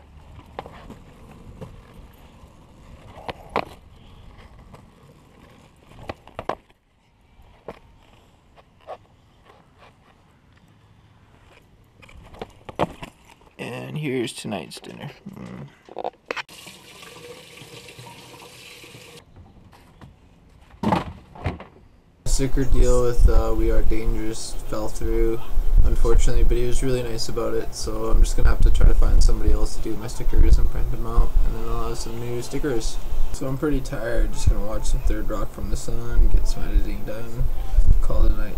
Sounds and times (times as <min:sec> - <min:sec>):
Sink (filling or washing): 0:16.5 - 0:19.2
Water: 0:16.5 - 0:19.2
Water tap, faucet: 0:16.5 - 0:19.2.